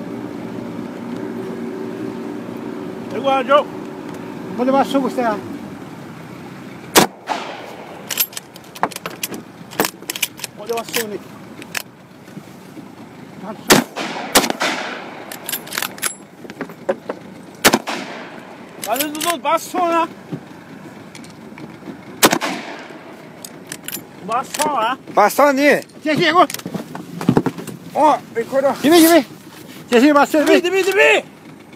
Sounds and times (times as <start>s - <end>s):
Speech: 10.6s - 11.2s, 18.9s - 20.1s, 28.0s - 29.3s, 29.9s - 31.3s.